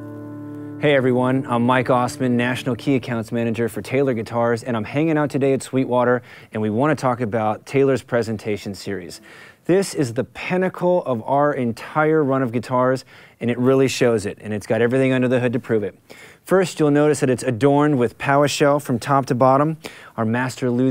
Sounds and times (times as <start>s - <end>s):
Speech: 0.8s - 20.9s.